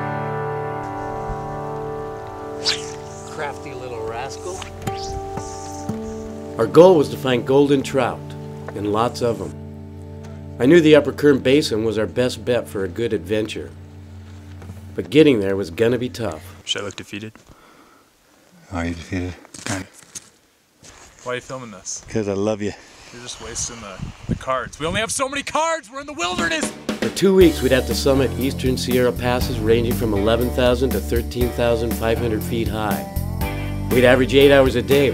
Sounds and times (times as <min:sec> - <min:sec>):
Speech: 0:10.6 - 0:13.7, 0:21.2 - 0:33.0, 0:33.9 - 0:35.1.